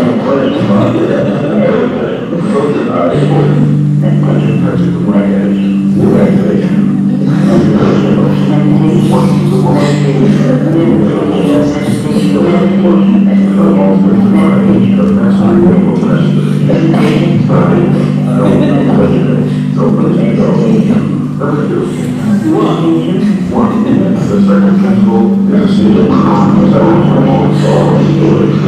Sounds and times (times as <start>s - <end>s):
Echo: 0.0s - 28.6s
Music: 0.0s - 28.6s
Speech: 0.0s - 28.6s.